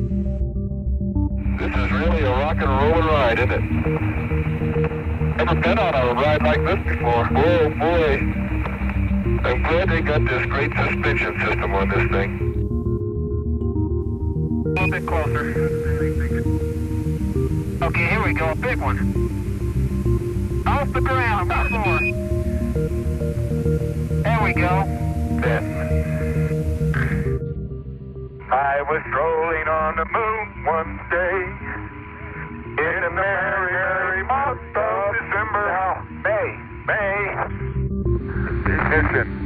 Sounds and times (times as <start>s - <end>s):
Radio: 1.6s - 4.2s, 5.4s - 12.5s, 14.8s - 16.6s, 17.8s - 19.2s, 20.7s - 22.2s, 24.3s - 27.3s, 28.4s - 37.7s, 38.3s - 39.4s.